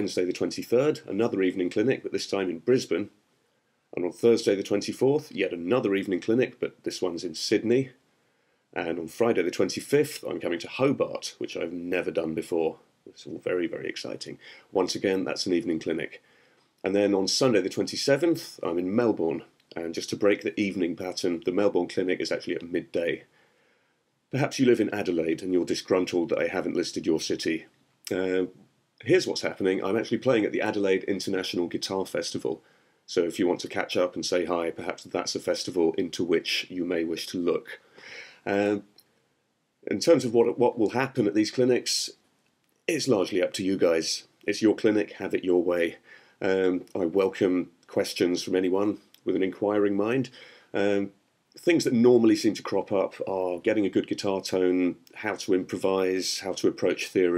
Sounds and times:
Speech: 0.0s - 3.2s, 4.0s - 8.0s, 8.8s - 16.2s, 16.8s - 23.3s, 24.3s - 37.8s, 38.4s - 39.0s, 39.8s - 42.2s, 42.9s - 57.3s.

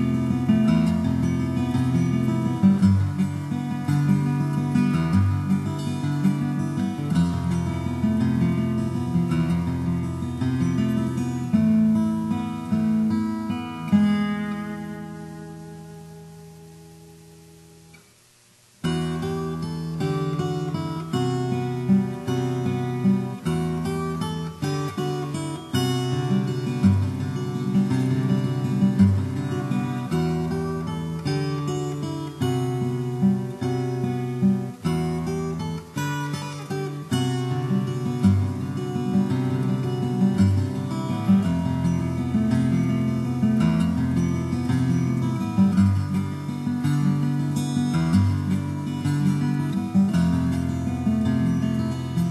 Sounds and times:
Guitar: 0.0s - 52.3s.

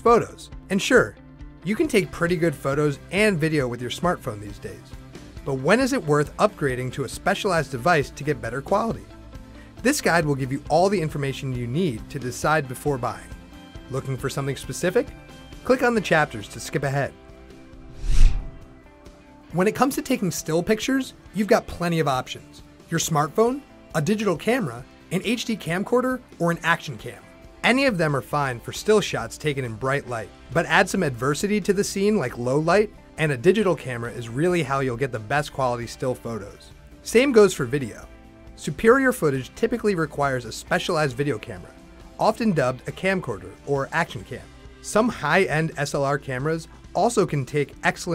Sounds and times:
Speech: 0.0s - 9.1s, 9.8s - 17.2s, 19.5s - 48.1s
Music: 0.0s - 48.1s.

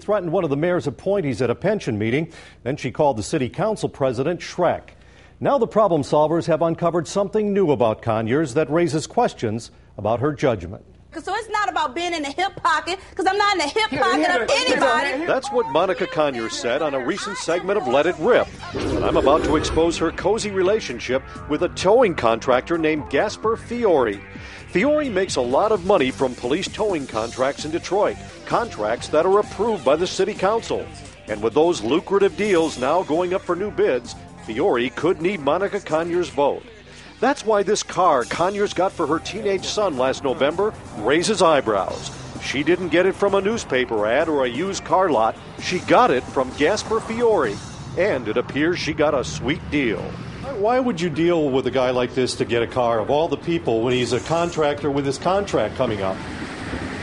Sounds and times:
Music: 13.5s - 55.8s.

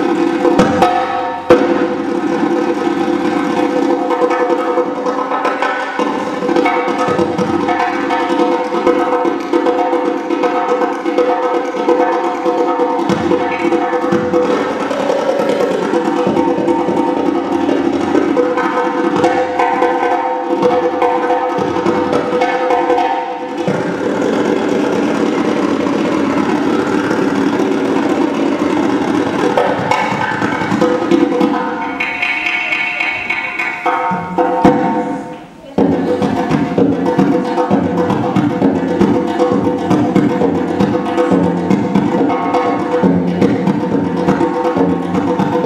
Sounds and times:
Wood block: 0.0s - 45.6s.

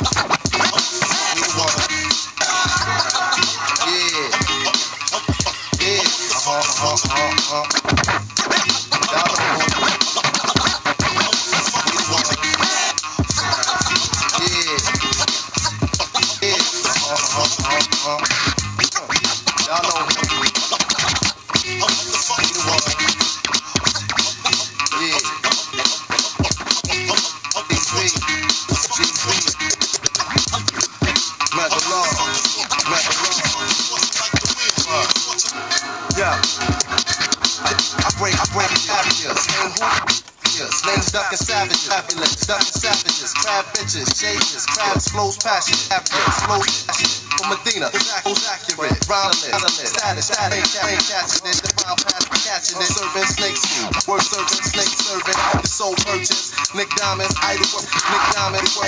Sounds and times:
Scratching (performance technique): 0.0s - 58.8s.

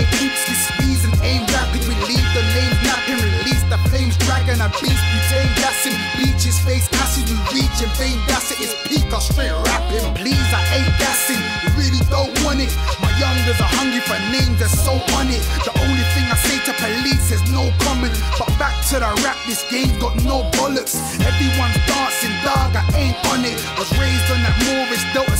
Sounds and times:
Dance music: 0.0s - 25.3s.

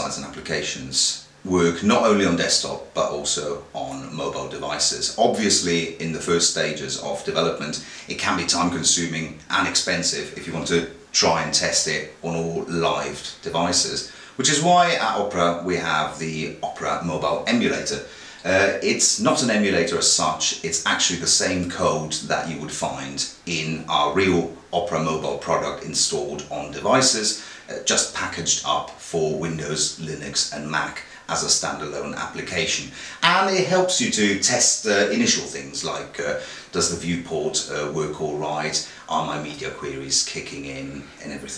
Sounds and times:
Speech: 0.0s - 41.5s.

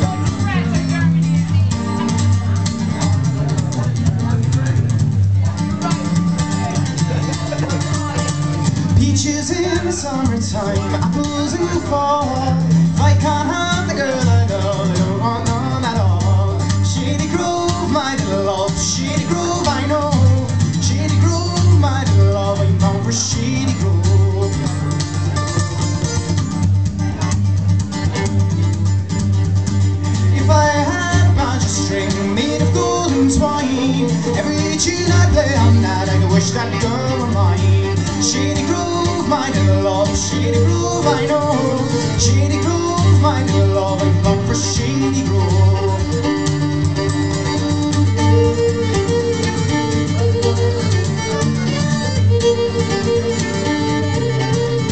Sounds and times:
Music: 0.0s - 54.9s.

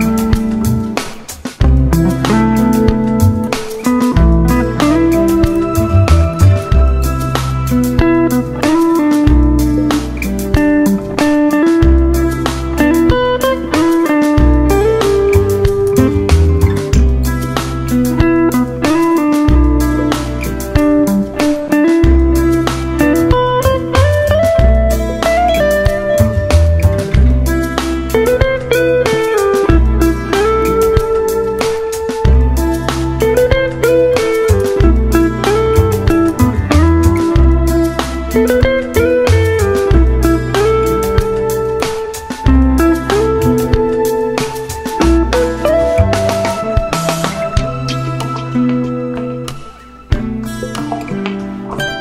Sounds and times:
Music: 0.0s - 52.0s.

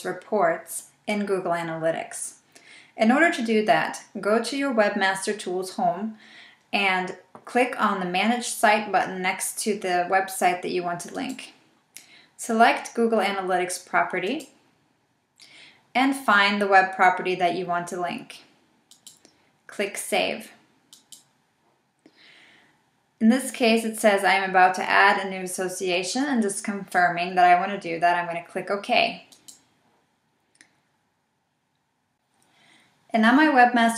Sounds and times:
Speech: 0.0s - 2.4s, 3.0s - 6.2s, 6.8s - 11.6s, 12.4s - 14.5s, 16.0s - 18.5s, 19.7s - 20.6s, 23.2s - 29.3s, 33.1s - 33.9s.

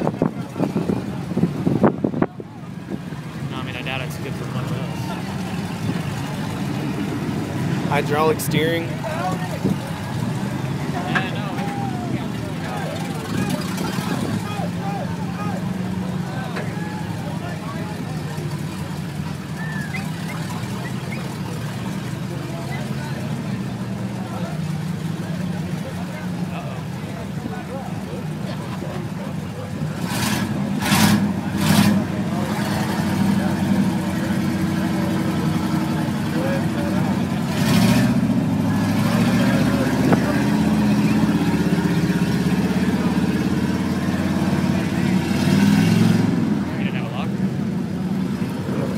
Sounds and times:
Vehicle: 0.0s - 48.9s
Speech: 2.2s - 5.4s, 7.9s - 10.2s, 10.8s - 19.0s, 19.6s - 30.0s, 31.4s - 37.6s, 46.6s - 47.4s.

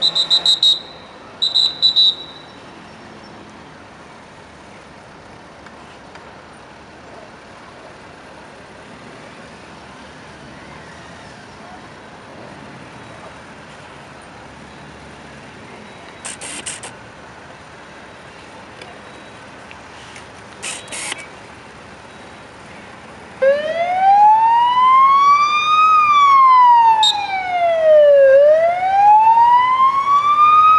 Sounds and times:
Vehicle: 0.0s - 30.7s.

